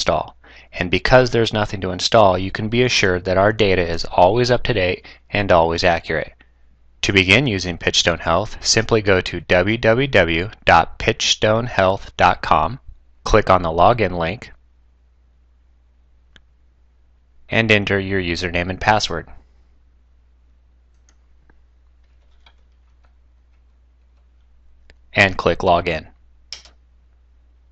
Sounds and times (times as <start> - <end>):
Speech: 0.0 - 6.4, 7.0 - 14.6, 17.5 - 19.4, 25.2 - 26.1.